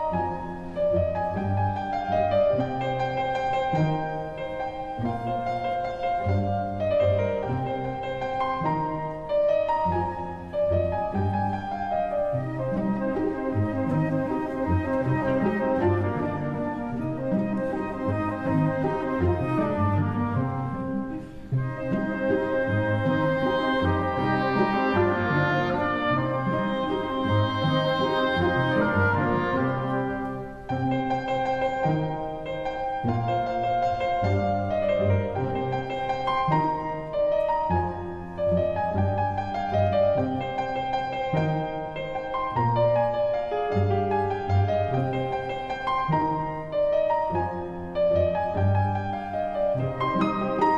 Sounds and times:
Orchestra: 0:00.0 - 0:50.7.

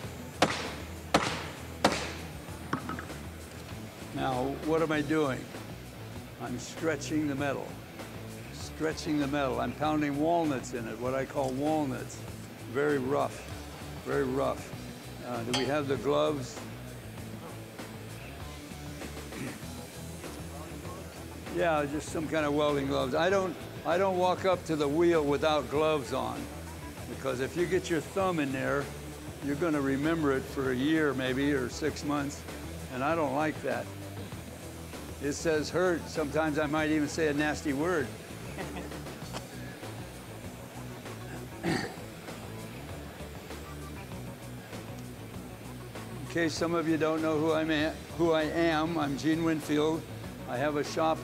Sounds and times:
Music: 0:00.0 - 0:51.2
Speech: 0:04.1 - 0:05.5, 0:06.4 - 0:07.7, 0:08.5 - 0:16.6, 0:20.4 - 0:26.5, 0:27.1 - 0:33.9, 0:35.2 - 0:38.1, 0:46.3 - 0:51.2.

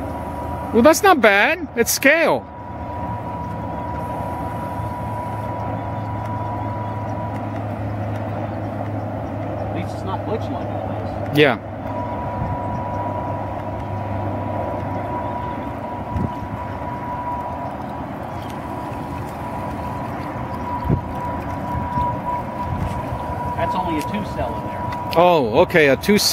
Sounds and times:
Boat, Water vehicle: 0:00.0 - 0:26.3.

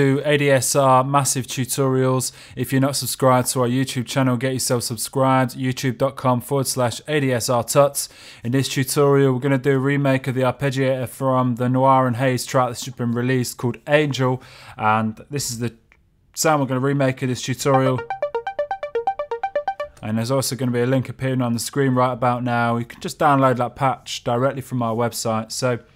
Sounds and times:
Speech: 0:00.0 - 0:15.8, 0:16.4 - 0:18.0, 0:20.0 - 0:25.9
Synthesizer: 0:17.7 - 0:20.0.

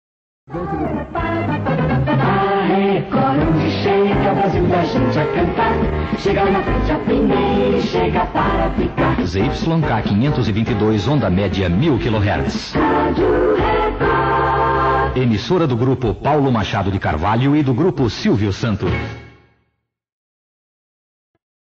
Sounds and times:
Music: 0:00.5 - 0:20.0
Speech: 0:09.2 - 0:12.8, 0:15.2 - 0:19.0.

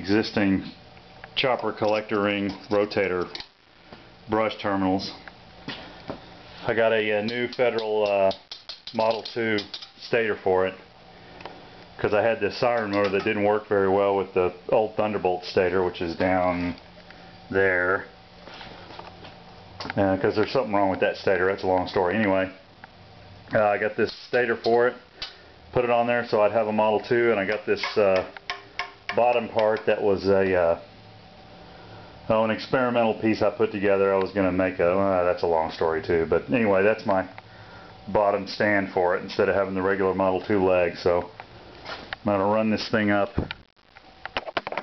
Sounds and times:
Speech: 0:00.0 - 0:00.8, 0:01.4 - 0:03.4, 0:04.3 - 0:05.2, 0:06.6 - 0:10.8, 0:12.0 - 0:16.8, 0:17.5 - 0:18.1, 0:19.9 - 0:22.6, 0:23.5 - 0:25.0, 0:25.7 - 0:28.4, 0:29.1 - 0:30.8, 0:32.3 - 0:37.4, 0:38.1 - 0:41.4, 0:42.2 - 0:43.4.

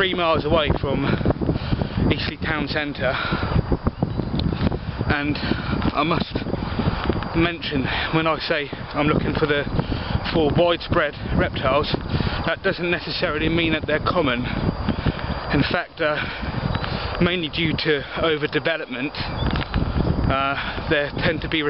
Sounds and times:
Speech: 0:00.0 - 0:01.2, 0:02.1 - 0:03.2, 0:05.1 - 0:06.4, 0:07.4 - 0:14.6, 0:15.5 - 0:16.3, 0:17.2 - 0:19.3, 0:20.3 - 0:21.6
Outside, rural or natural: 0:00.0 - 0:21.6.

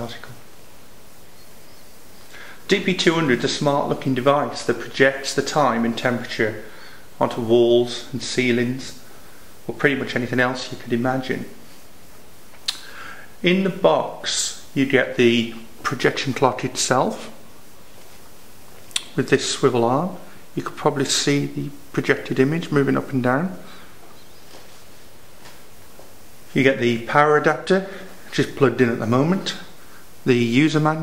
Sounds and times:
Speech: 0:00.0 - 0:00.5, 0:02.7 - 0:09.0, 0:09.7 - 0:11.6, 0:13.4 - 0:17.4, 0:19.0 - 0:23.8, 0:26.5 - 0:31.0.

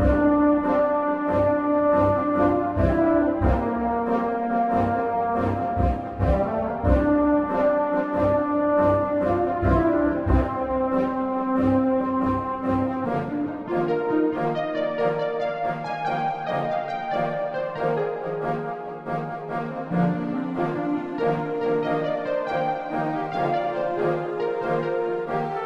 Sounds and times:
Music: 0:00.0 - 0:25.6.

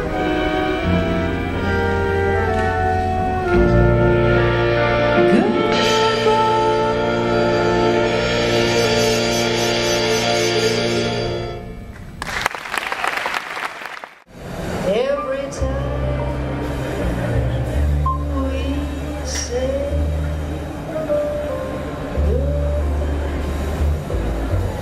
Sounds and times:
Music: 0:00.0 - 0:12.1, 0:15.0 - 0:24.8
Applause: 0:12.0 - 0:14.3.

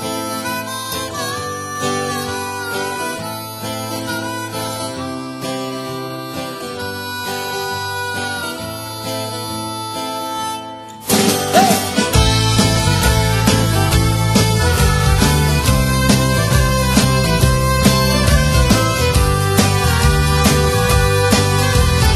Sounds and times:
Guitar: 0:00.0 - 0:22.1.

